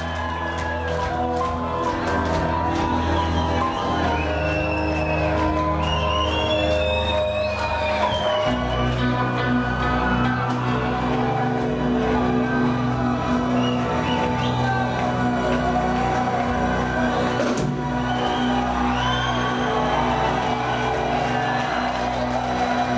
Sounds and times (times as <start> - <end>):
Music: 0.0 - 22.9.